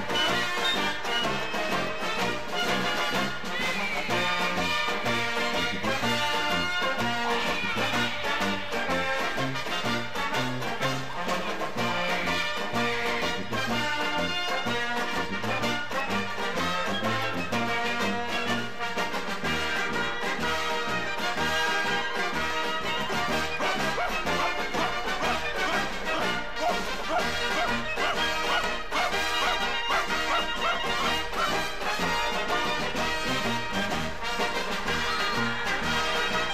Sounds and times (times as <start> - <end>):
Music: 0.0 - 36.5.